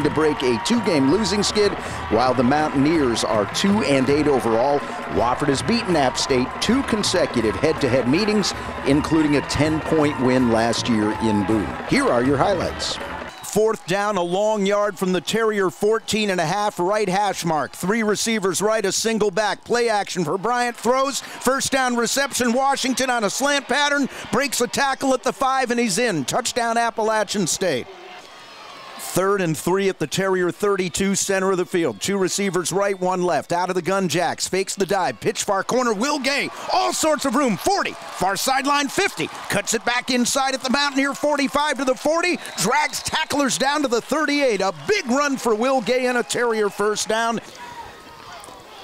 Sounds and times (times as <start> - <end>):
Speech: 0.0 - 27.9, 29.0 - 47.4.